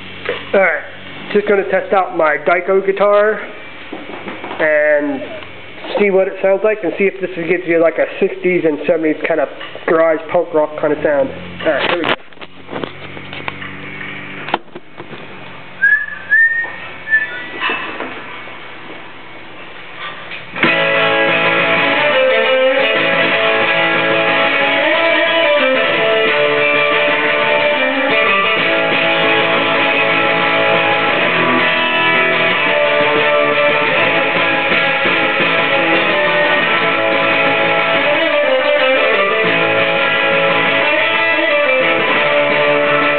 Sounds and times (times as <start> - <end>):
Whistling: 15.8 - 17.6.